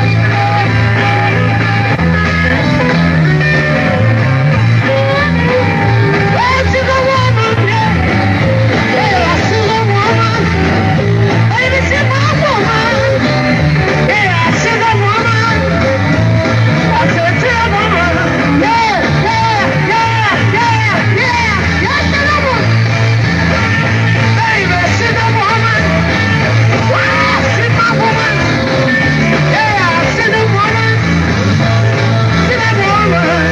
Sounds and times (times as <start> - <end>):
Inside, public space: 0.0 - 33.5
Music: 0.0 - 33.5.